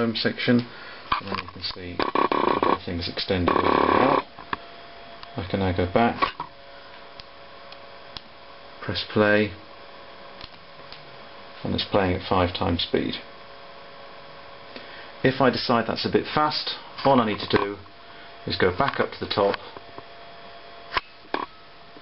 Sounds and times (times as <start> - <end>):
Speech: 0.0 - 2.1, 2.7 - 4.2, 5.4 - 6.3, 8.8 - 9.6, 11.6 - 13.3, 15.2 - 19.6.